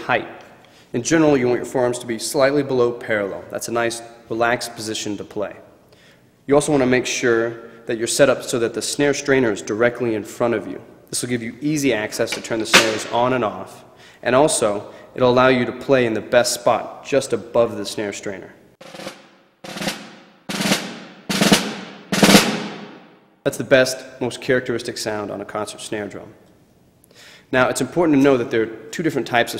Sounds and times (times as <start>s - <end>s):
Speech: 0.0s - 5.7s, 6.5s - 18.6s, 23.5s - 26.4s, 27.5s - 29.5s
Music: 18.8s - 23.2s.